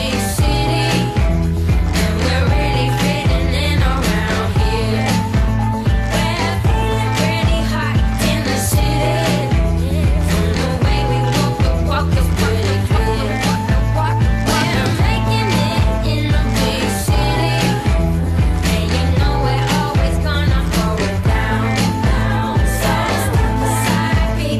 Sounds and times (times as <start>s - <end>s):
Pop music: 0.0s - 24.5s.